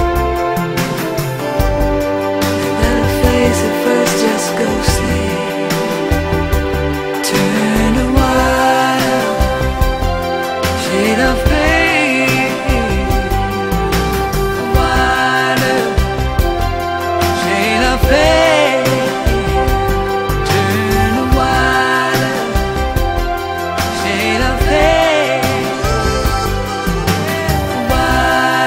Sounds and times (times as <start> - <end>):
Music: 0.0 - 28.6.